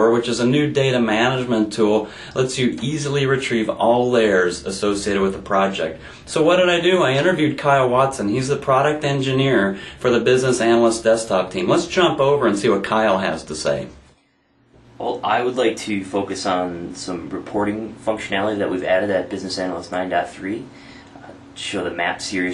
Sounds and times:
Speech: 0.0s - 14.0s, 15.0s - 22.5s.

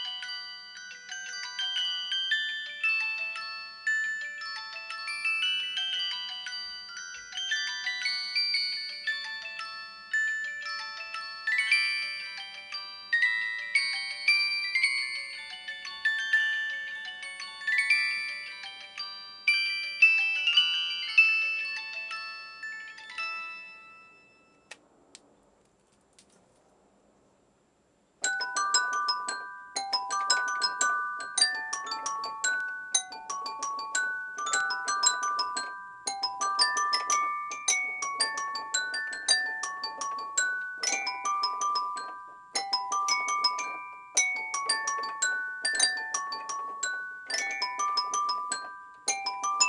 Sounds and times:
Piano: 28.2s - 49.6s.

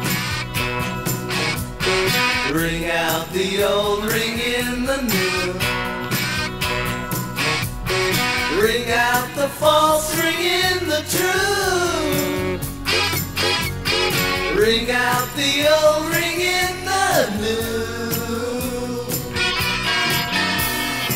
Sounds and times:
Music: 0.0s - 21.1s.

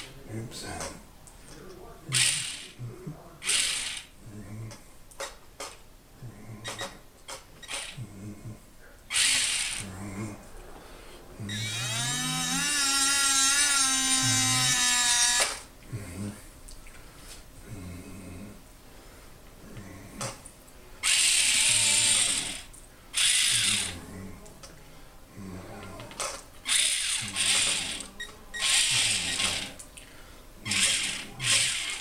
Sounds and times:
Inside, small room: 0.0s - 32.0s.

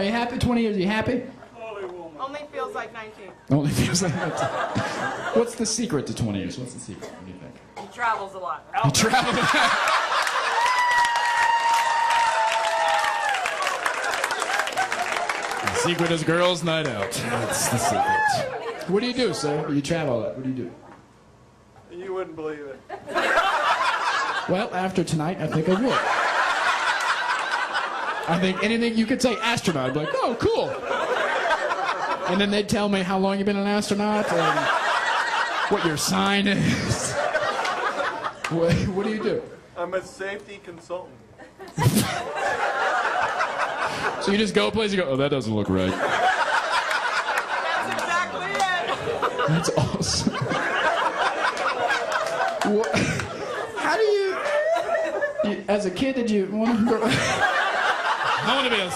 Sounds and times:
Laughter: 3.6s - 5.6s, 8.8s - 11.0s, 22.9s - 24.7s, 25.4s - 28.7s, 29.3s - 32.5s, 34.2s - 39.4s, 41.4s - 44.3s, 45.9s - 55.7s, 56.6s - 58.9s.

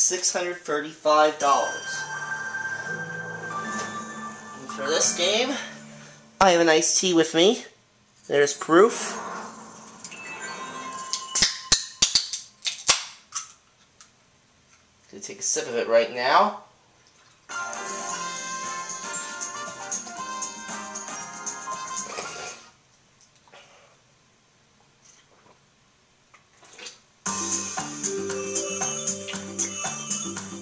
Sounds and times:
Speech: 0.0s - 2.0s, 4.6s - 5.8s, 6.4s - 9.2s, 15.1s - 16.7s
Music: 1.2s - 7.1s, 17.5s - 22.7s, 27.2s - 30.6s.

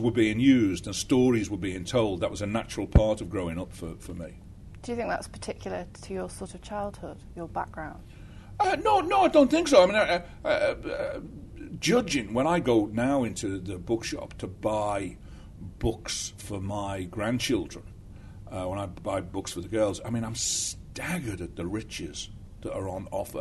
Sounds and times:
Speech: 0.0s - 8.0s, 8.6s - 17.8s, 18.5s - 23.4s
Inside, small room: 0.0s - 23.4s.

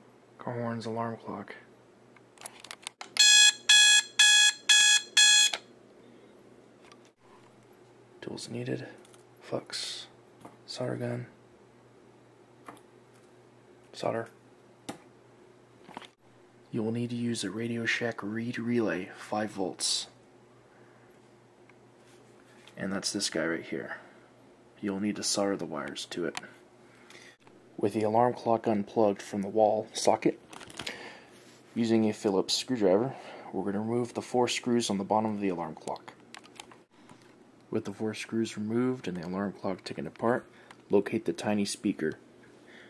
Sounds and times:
Speech: 0.4s - 1.7s, 8.2s - 11.4s, 13.9s - 14.4s, 16.7s - 20.2s, 22.8s - 24.2s, 24.8s - 26.6s, 27.8s - 30.4s, 31.8s - 36.2s, 37.7s - 42.2s.

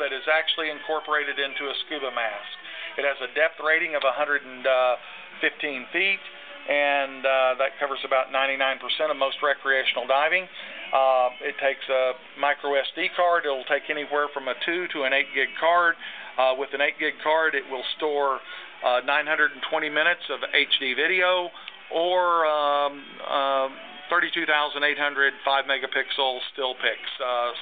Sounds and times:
Music: 0.0s - 27.6s
Speech: 0.0s - 27.6s.

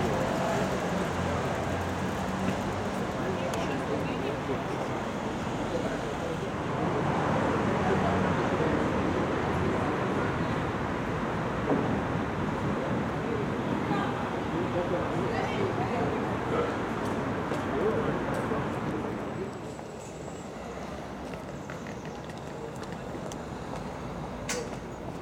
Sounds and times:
Outside, urban or manmade: 0.0s - 25.2s
Speech: 3.0s - 10.6s, 12.8s - 19.8s.

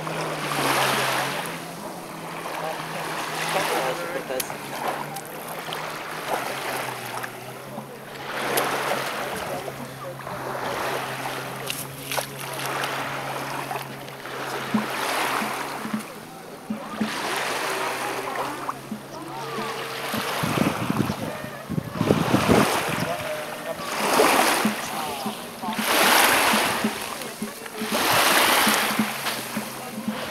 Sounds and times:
Music: 0.0s - 30.3s
Outside, rural or natural: 0.0s - 30.3s
Speech: 0.7s - 5.5s, 6.2s - 10.9s, 15.9s - 30.3s.

